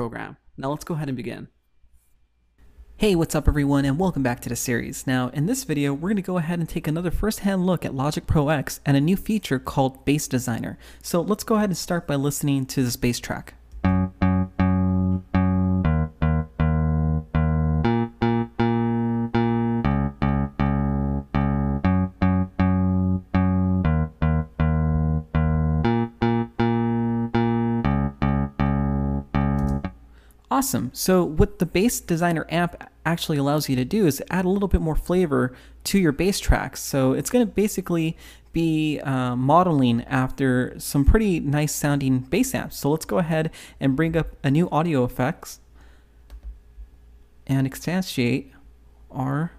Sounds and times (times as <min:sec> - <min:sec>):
Speech: 0:00.0 - 0:01.6, 0:03.0 - 0:13.6, 0:30.5 - 0:45.7, 0:47.4 - 0:49.5
Bass guitar: 0:13.7 - 0:30.1.